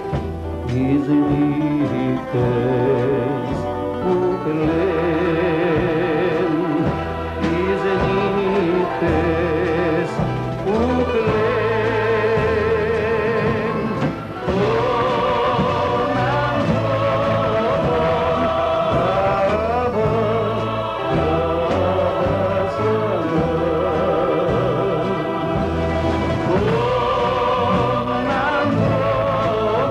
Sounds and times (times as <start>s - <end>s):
Gospel music: 0.0s - 29.9s
Singing: 0.0s - 29.9s.